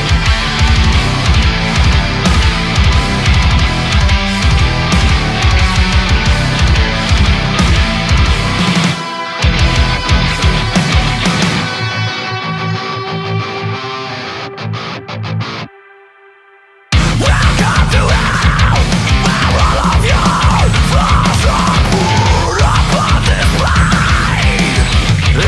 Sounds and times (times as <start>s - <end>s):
Music: 0.0s - 25.4s.